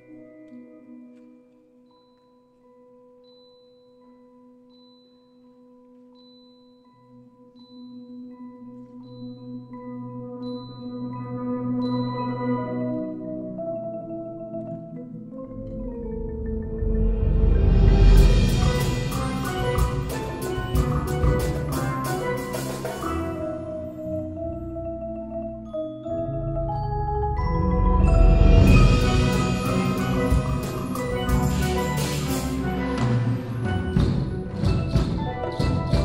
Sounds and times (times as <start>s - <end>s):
Glockenspiel: 0.0s - 36.0s
Marimba, xylophone: 0.0s - 36.0s.